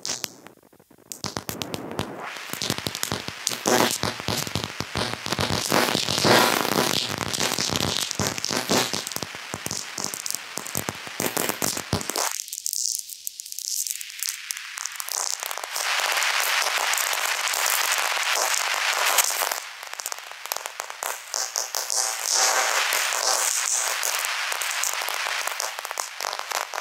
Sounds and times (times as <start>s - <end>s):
Crackle: 0.0s - 26.8s.